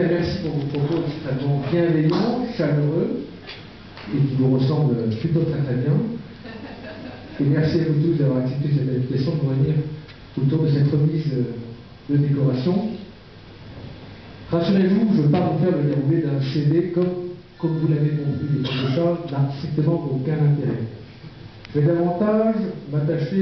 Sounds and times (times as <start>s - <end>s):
Speech: 0.0s - 3.3s, 4.1s - 6.2s, 7.4s - 13.1s, 14.5s - 21.0s, 21.8s - 23.4s.